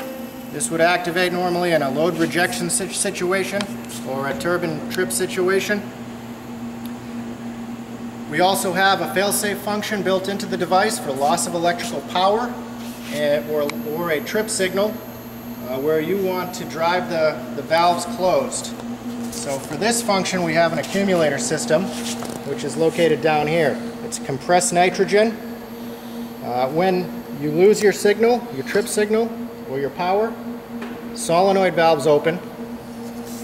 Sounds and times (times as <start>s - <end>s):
Inside, large room or hall: 0.0s - 5.9s
Speech: 0.6s - 5.9s, 8.3s - 15.0s, 15.6s - 18.8s, 19.4s - 25.4s, 26.4s - 30.4s, 31.2s - 32.5s.